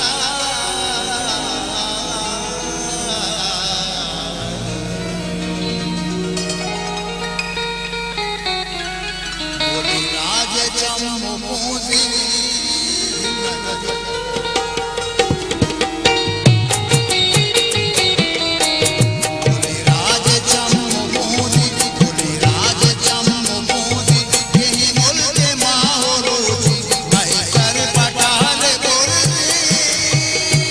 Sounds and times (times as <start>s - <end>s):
Independent music: 0.0s - 30.7s.